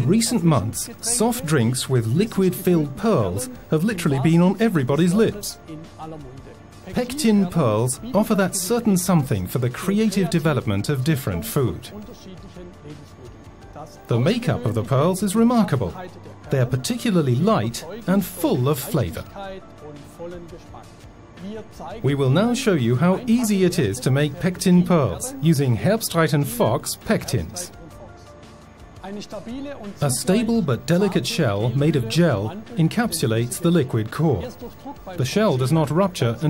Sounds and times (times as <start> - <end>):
Speech: 0.0 - 28.2, 29.0 - 36.5
Music: 0.0 - 36.5.